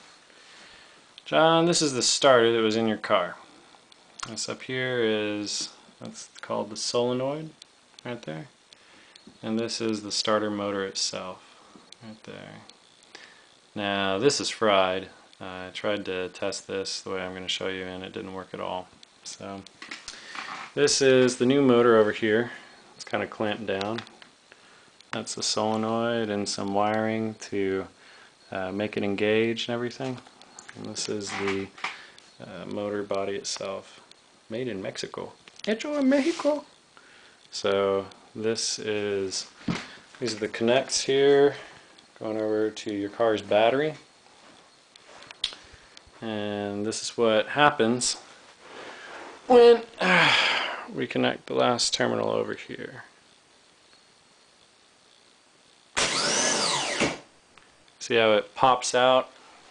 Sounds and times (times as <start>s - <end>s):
Speech: 1.2s - 3.4s, 4.2s - 8.5s, 9.4s - 11.4s, 12.0s - 12.7s, 13.8s - 19.7s, 20.8s - 24.1s, 25.2s - 27.9s, 28.5s - 30.2s, 30.8s - 31.8s, 32.4s - 36.7s, 37.5s - 39.5s, 40.2s - 44.1s, 46.2s - 48.2s, 49.5s - 50.2s, 50.9s - 53.1s, 58.0s - 59.3s.